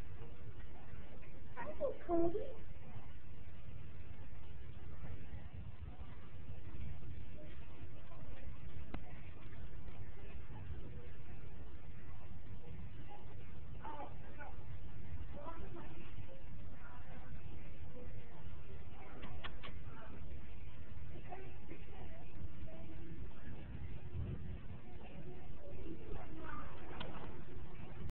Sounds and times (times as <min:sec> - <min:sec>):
Speech: 0:01.5 - 0:03.0, 0:12.2 - 0:28.1.